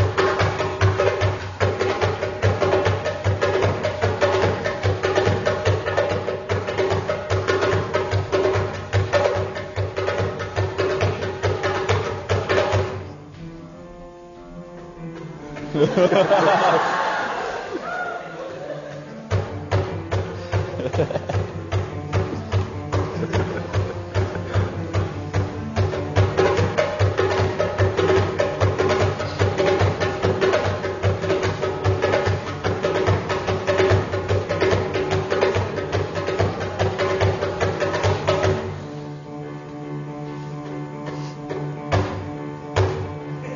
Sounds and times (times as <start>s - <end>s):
Music: 0.0s - 43.5s.